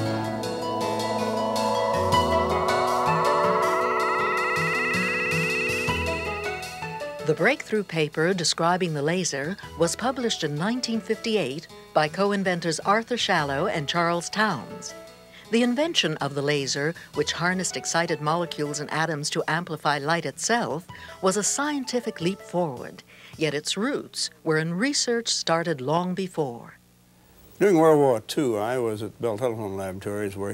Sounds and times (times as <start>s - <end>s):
Music: 0.0s - 25.6s
Speech: 7.3s - 14.9s, 15.5s - 26.8s, 27.6s - 30.5s.